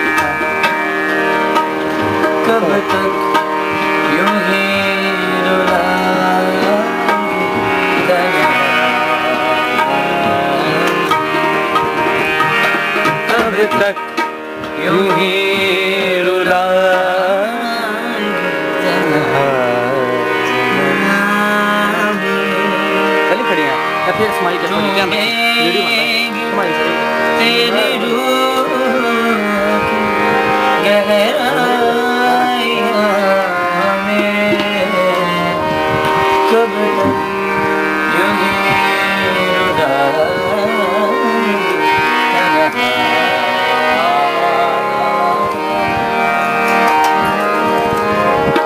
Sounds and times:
Folk music: 0.0s - 48.6s
Male singing: 2.3s - 11.6s, 13.1s - 37.4s, 38.0s - 46.6s
Speech: 23.3s - 28.9s.

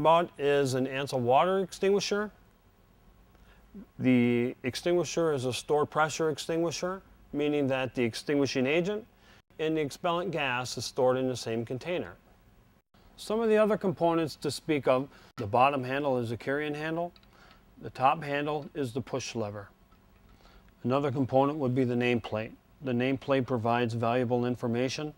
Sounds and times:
Speech: 0.0s - 2.4s, 3.8s - 12.2s, 13.2s - 17.2s, 17.8s - 19.7s, 20.8s - 25.1s.

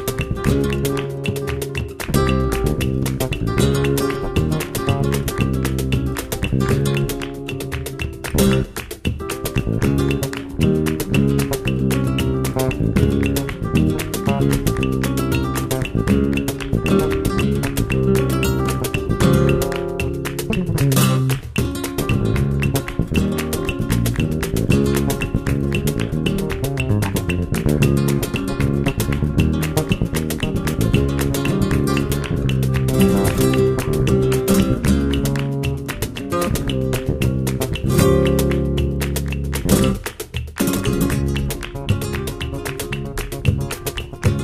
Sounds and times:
Ukulele: 0.0s - 44.4s.

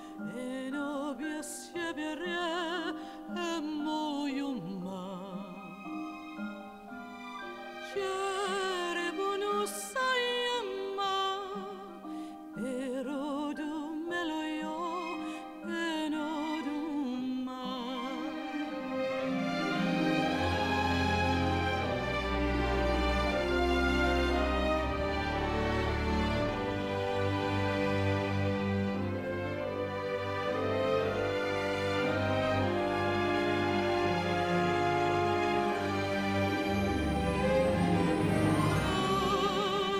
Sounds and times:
Theme music: 17.9s - 39.9s.

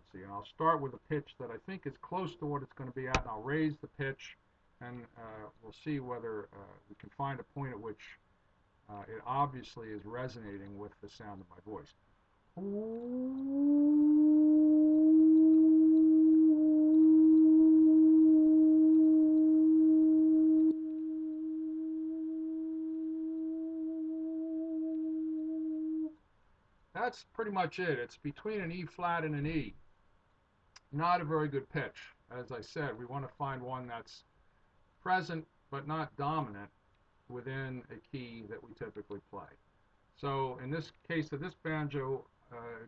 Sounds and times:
Howl: 12.6s - 26.2s.

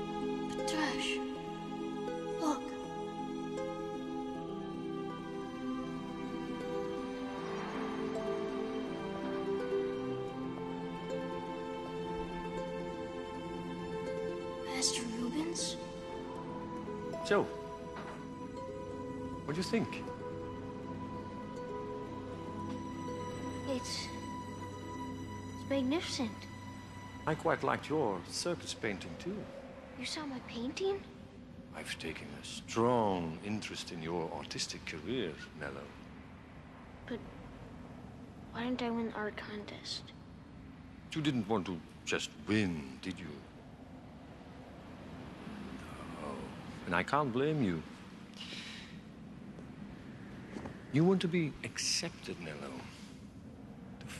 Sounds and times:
Music: 0.0s - 31.0s
Speech: 27.3s - 29.4s, 31.8s - 35.9s, 38.6s - 40.1s, 41.1s - 43.4s, 45.9s - 47.8s, 51.0s - 53.0s.

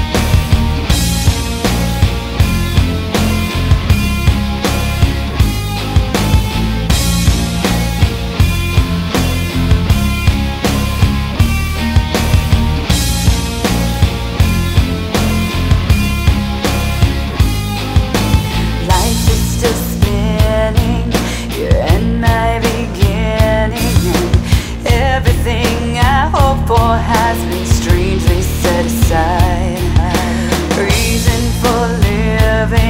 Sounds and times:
Music: 0.0s - 32.8s.

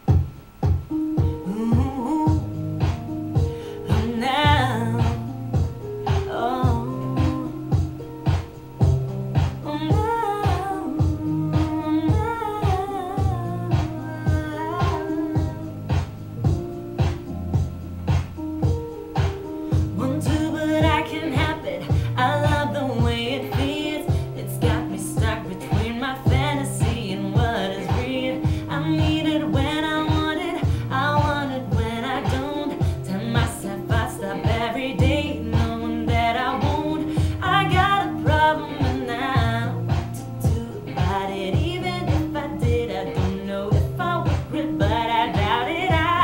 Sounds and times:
Music: 0.0s - 46.2s
Female singing: 1.4s - 2.5s, 3.9s - 5.3s, 6.2s - 7.8s, 9.6s - 15.8s, 20.0s - 46.2s.

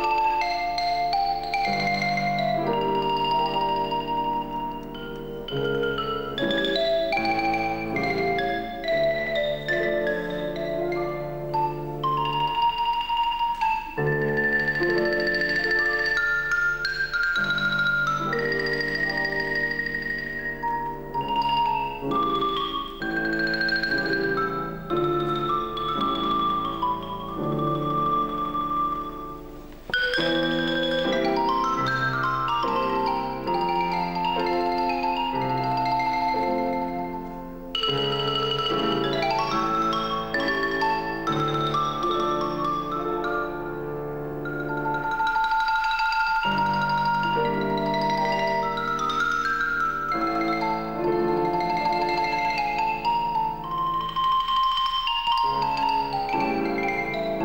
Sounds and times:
Glockenspiel: 0.0s - 57.4s
Marimba, xylophone: 0.0s - 57.4s.

